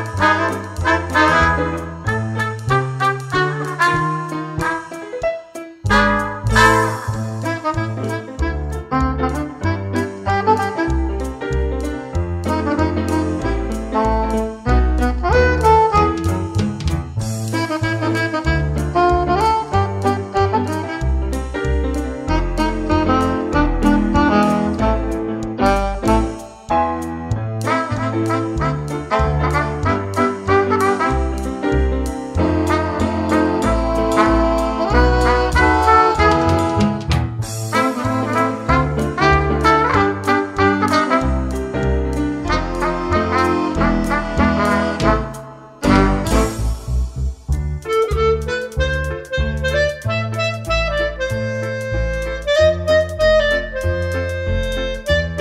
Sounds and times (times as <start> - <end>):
Music: 0.0 - 55.4.